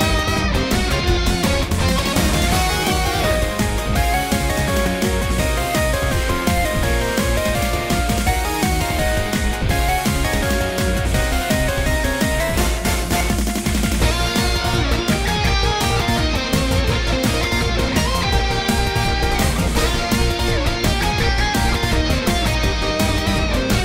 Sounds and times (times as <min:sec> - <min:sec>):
Background music: 0:00.0 - 0:23.8
Theme music: 0:00.0 - 0:23.8.